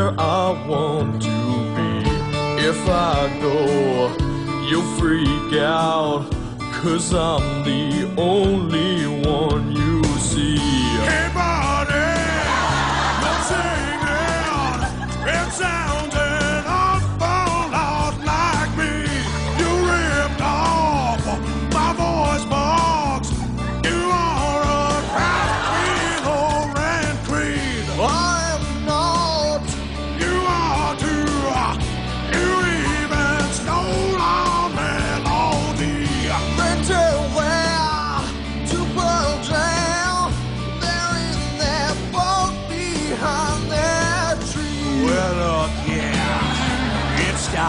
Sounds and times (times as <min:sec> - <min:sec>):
Music: 0:00.0 - 0:47.6.